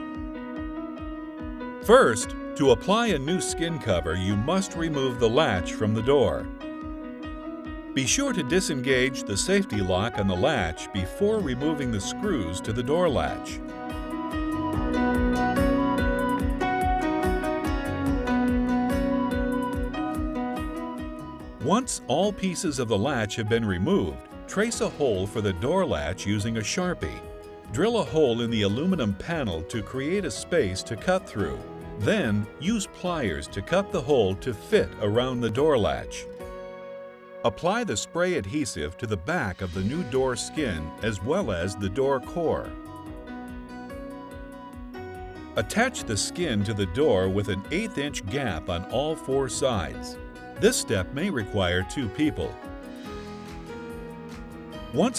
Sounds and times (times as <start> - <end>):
Music: 0.0 - 55.1
Speech: 1.8 - 6.5, 8.0 - 13.6, 21.6 - 36.3, 37.5 - 42.7, 45.6 - 52.6, 55.0 - 55.1.